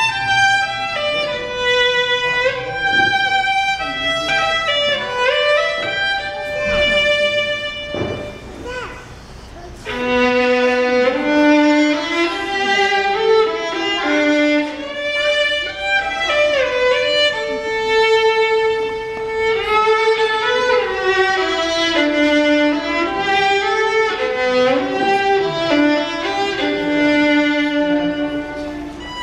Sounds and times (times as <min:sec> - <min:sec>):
Violin, fiddle: 0:00.0 - 0:08.8, 0:09.8 - 0:29.2.